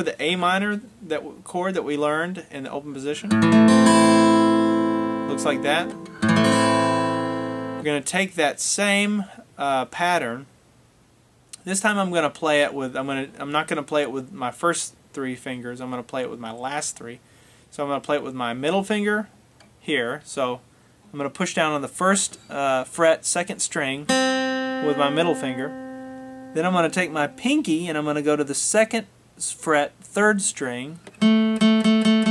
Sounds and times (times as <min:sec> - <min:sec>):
Speech: 0:00.0 - 0:03.3, 0:05.3 - 0:05.9, 0:07.8 - 0:10.5, 0:11.6 - 0:24.1, 0:24.8 - 0:25.7, 0:26.6 - 0:31.0.